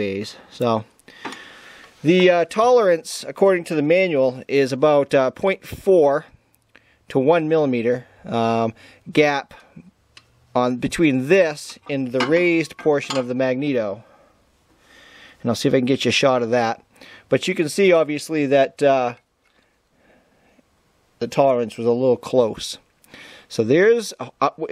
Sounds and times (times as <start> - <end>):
Speech: 0.0 - 0.9, 2.0 - 6.4, 7.1 - 9.8, 10.6 - 14.1, 15.4 - 19.2, 21.2 - 22.8, 23.5 - 24.7.